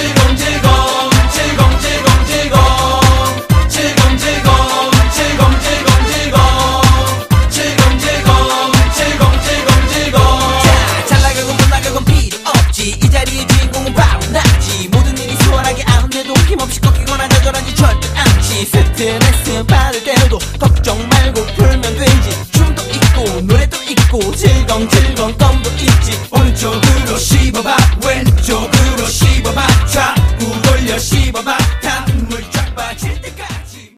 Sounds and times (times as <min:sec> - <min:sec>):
Music: 0:00.0 - 0:33.9.